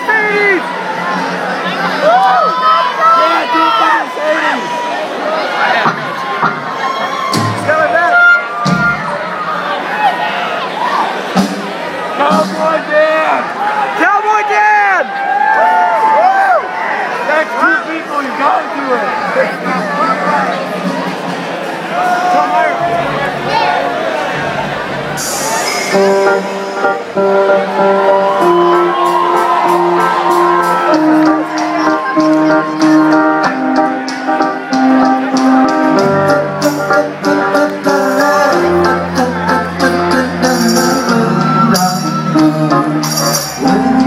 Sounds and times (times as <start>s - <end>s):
Music: 0.0s - 3.0s, 5.8s - 9.7s, 11.2s - 12.9s, 19.4s - 44.0s.